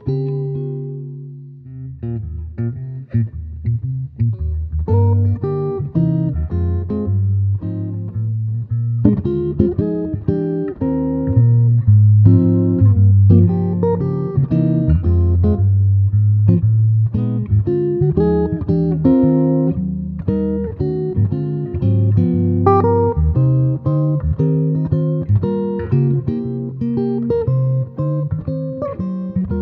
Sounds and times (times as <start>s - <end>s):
Strum: 0.0s - 29.6s.